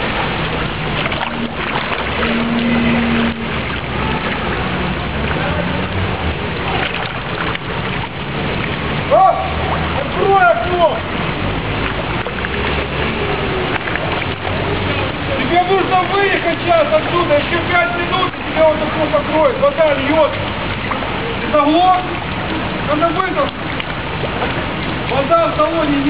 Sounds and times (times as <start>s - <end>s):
Car: 0.0s - 26.0s
Rain: 0.0s - 26.0s
Speech: 9.1s - 11.1s, 15.2s - 20.4s, 21.4s - 22.2s, 22.9s - 23.6s, 25.1s - 26.0s.